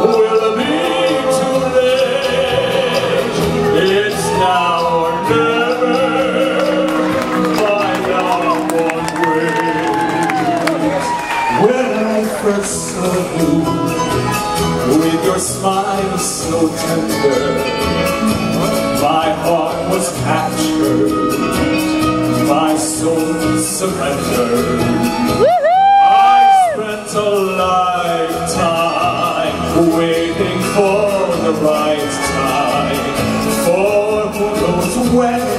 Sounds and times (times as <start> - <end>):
Male singing: 0.0 - 14.2, 14.8 - 18.0, 18.9 - 21.7, 22.4 - 35.5
Music: 0.0 - 35.5.